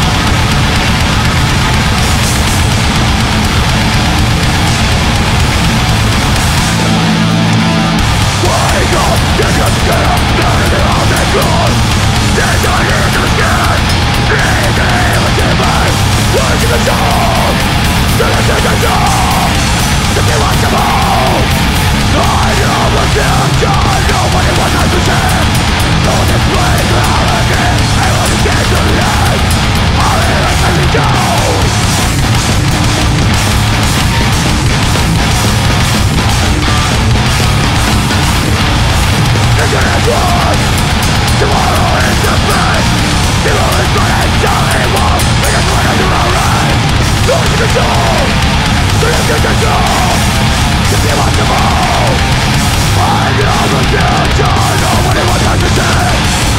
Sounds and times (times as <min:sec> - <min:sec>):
Music: 0:00.0 - 0:56.5.